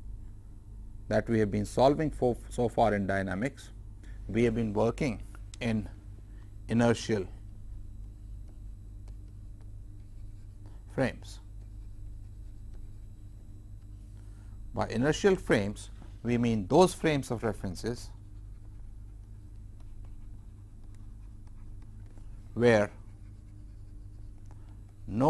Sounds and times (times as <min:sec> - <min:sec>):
Speech: 0:01.1 - 0:06.0, 0:06.7 - 0:07.4, 0:10.9 - 0:11.5, 0:14.8 - 0:18.2, 0:22.6 - 0:23.0, 0:25.1 - 0:25.3.